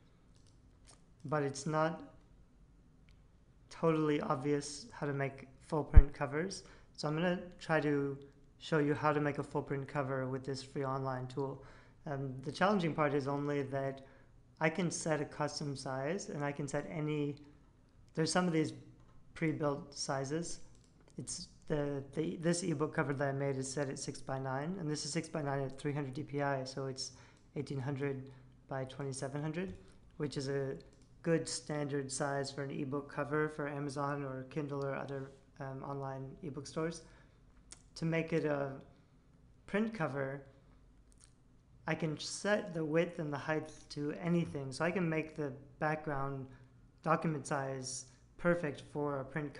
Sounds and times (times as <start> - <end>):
Speech: 1.2 - 2.2, 3.7 - 17.5, 18.1 - 38.9, 39.7 - 40.5, 41.8 - 49.6.